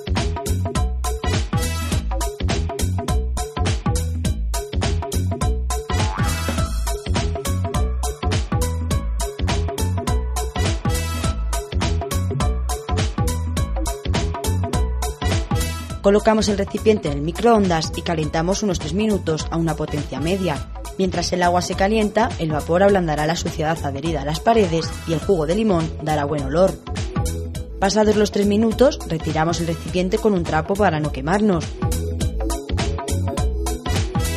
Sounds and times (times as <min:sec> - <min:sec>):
Music: 0:00.0 - 0:34.3
Speech: 0:16.0 - 0:26.8, 0:27.8 - 0:31.8.